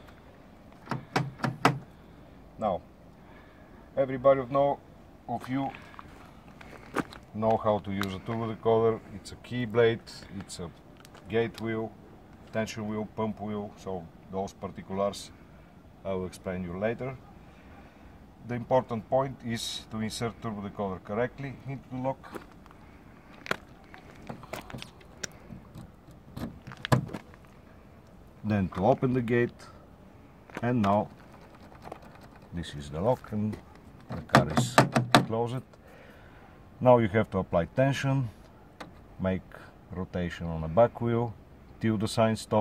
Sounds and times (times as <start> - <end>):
Speech: 2.6 - 2.9, 4.0 - 5.9, 7.3 - 15.4, 16.0 - 17.2, 18.4 - 22.4, 28.4 - 29.8, 30.6 - 31.1, 32.5 - 35.7, 36.8 - 38.4, 39.2 - 42.6.